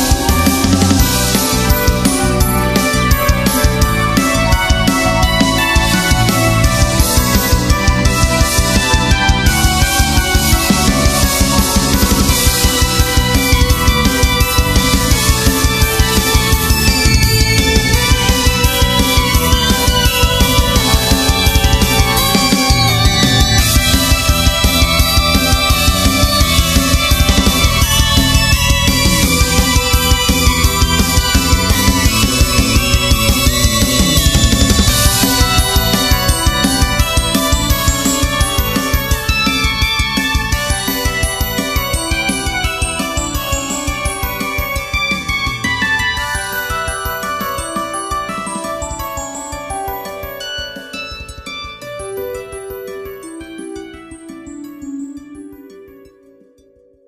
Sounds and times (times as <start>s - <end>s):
Music: 0.0s - 57.0s.